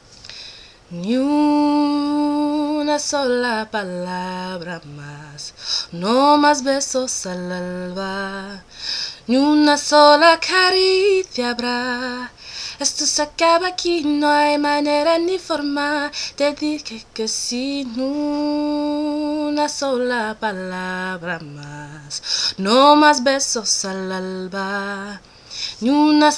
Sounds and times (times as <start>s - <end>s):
Female singing: 0.9s - 26.3s.